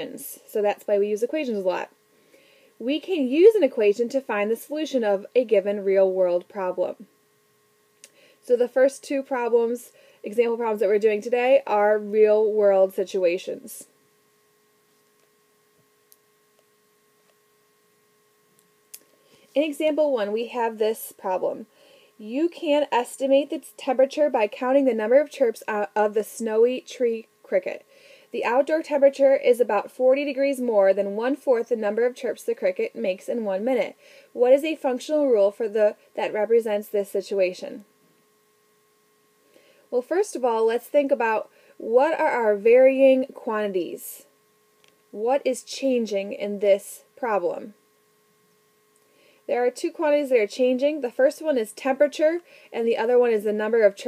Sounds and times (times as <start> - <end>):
Speech: 0.0 - 2.0, 2.8 - 7.1, 8.5 - 13.9, 19.6 - 27.8, 28.4 - 37.9, 39.9 - 44.3, 45.2 - 47.8, 49.5 - 54.0.